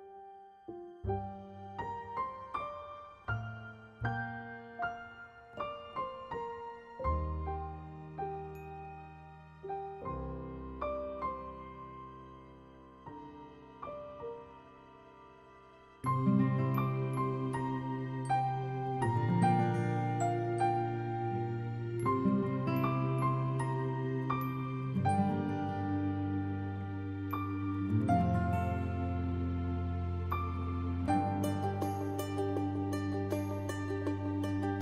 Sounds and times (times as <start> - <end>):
Music: 0.0 - 34.8.